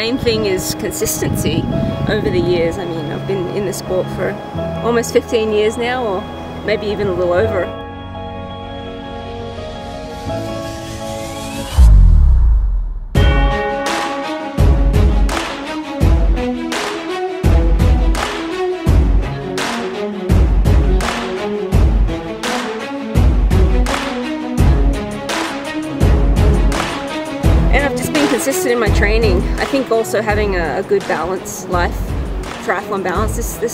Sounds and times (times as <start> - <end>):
Music: 0.0 - 33.7.